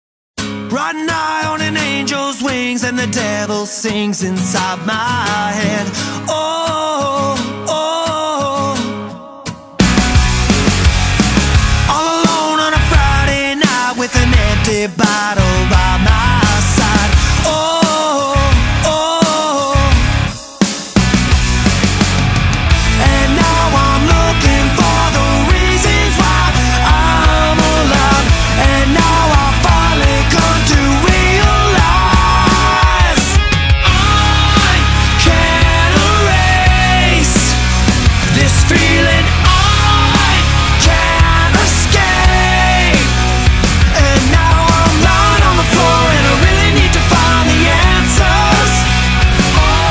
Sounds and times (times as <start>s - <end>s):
Music: 0.4s - 49.9s.